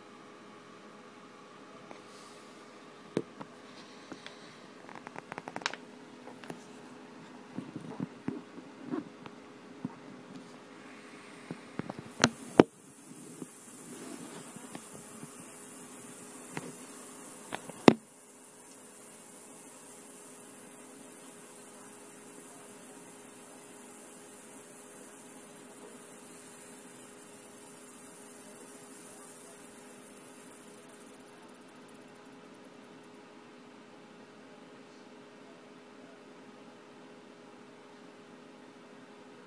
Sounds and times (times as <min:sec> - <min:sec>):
Snake: 0:10.4 - 0:33.3.